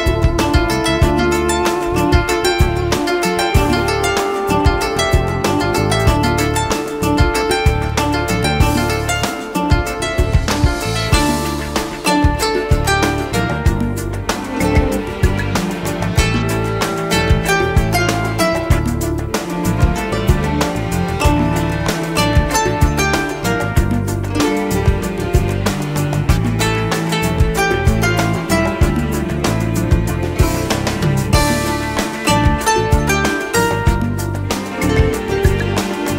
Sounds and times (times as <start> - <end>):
New-age music: 0.0 - 36.1.